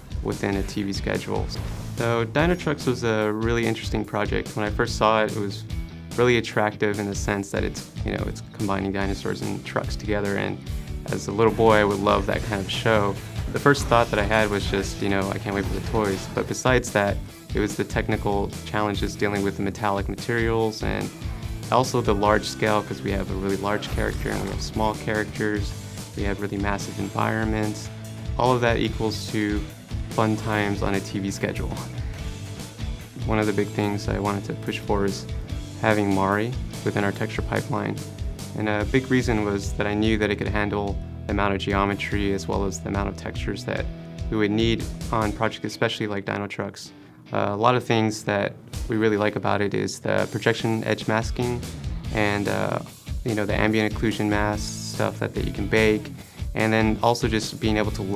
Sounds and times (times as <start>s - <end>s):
Music: 0.0s - 58.1s
Speech: 0.1s - 32.0s, 33.2s - 58.1s.